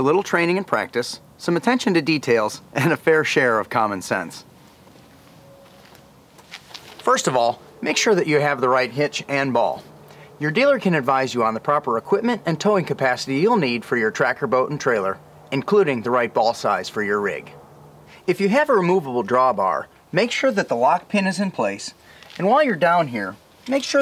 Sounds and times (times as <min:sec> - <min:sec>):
Speech: 0:00.0 - 0:04.5, 0:07.0 - 0:09.8, 0:10.4 - 0:17.6, 0:18.3 - 0:24.0.